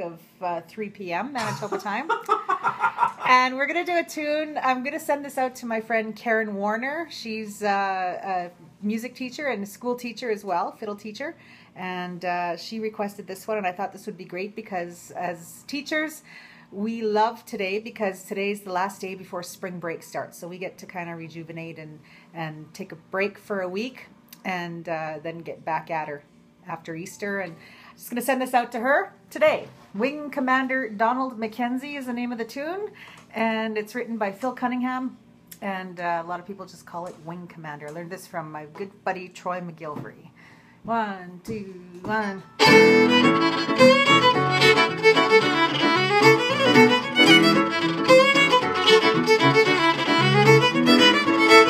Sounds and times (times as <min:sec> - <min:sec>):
Speech: 0:00.0 - 0:02.1, 0:03.3 - 0:16.2, 0:16.8 - 0:40.3, 0:40.9 - 0:42.5.